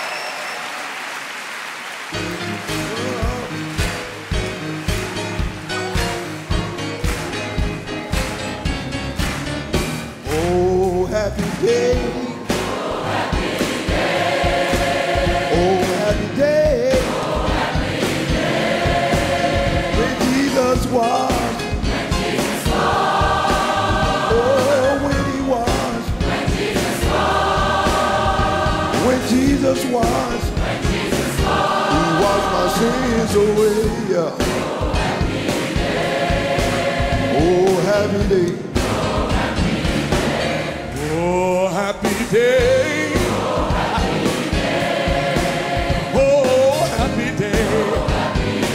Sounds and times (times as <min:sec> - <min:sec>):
Music: 0:00.0 - 0:48.7.